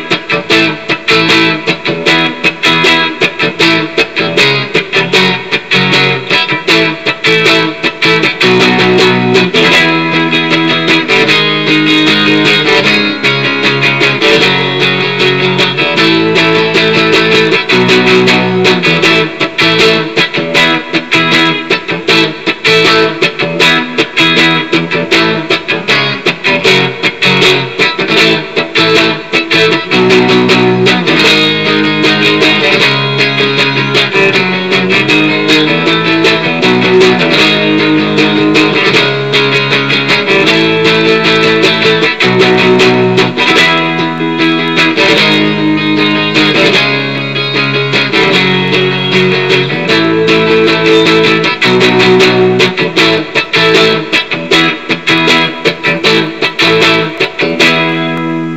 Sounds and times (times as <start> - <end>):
Strum: 0.0 - 58.5.